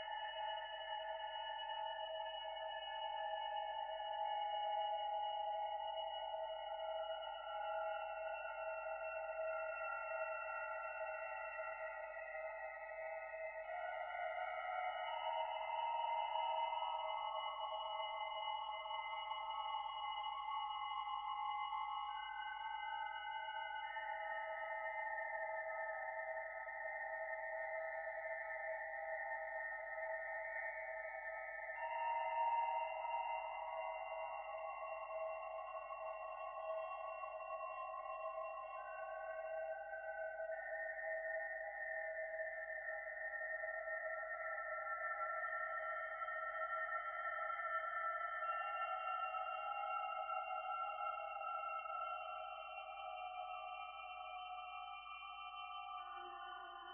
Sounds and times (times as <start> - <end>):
Music: 0.0 - 56.9
Sonar: 0.0 - 56.9.